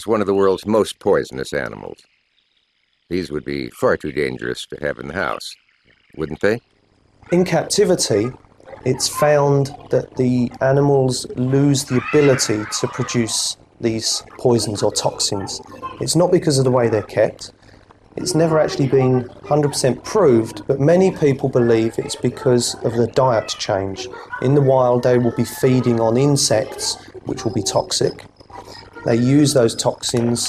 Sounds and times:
Speech: 0.0 - 2.0, 3.1 - 5.6, 6.2 - 6.6, 7.3 - 17.5, 18.2 - 30.4.

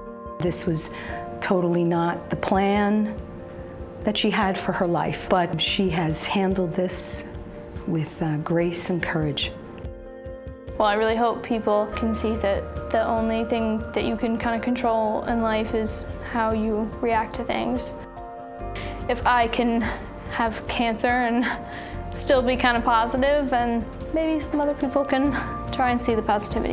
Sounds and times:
Music: 0.0 - 26.7
Speech: 0.4 - 3.2, 4.0 - 7.3, 7.9 - 9.6, 10.8 - 18.0, 19.1 - 21.5, 22.2 - 26.7.

